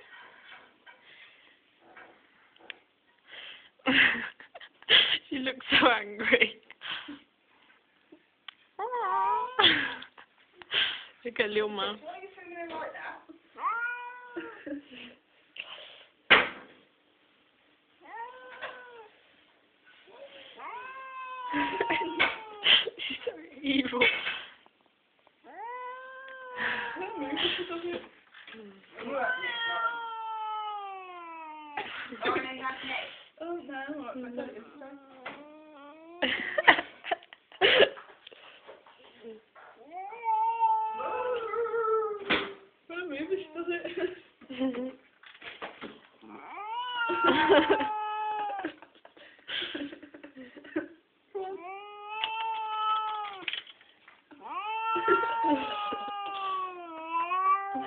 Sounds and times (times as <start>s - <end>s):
Meow: 8.8s - 9.6s, 13.6s - 14.6s, 18.0s - 19.2s, 20.6s - 22.6s, 25.5s - 27.3s, 29.0s - 31.8s, 34.7s - 36.2s, 39.8s - 42.3s, 46.2s - 48.7s, 51.6s - 53.6s, 54.4s - 57.8s.